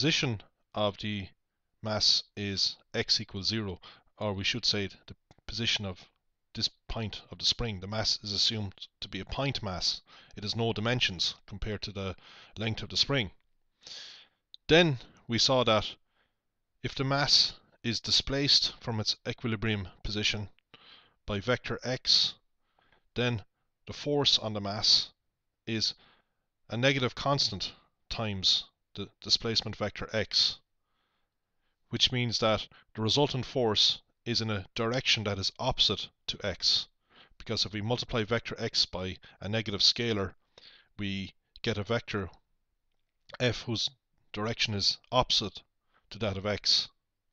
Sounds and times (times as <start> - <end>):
Speech: 0.0 - 13.4, 14.6 - 16.0, 16.8 - 20.6, 21.3 - 22.4, 23.2 - 26.0, 26.7 - 30.7, 31.9 - 40.4, 41.0 - 42.4, 43.3 - 47.0.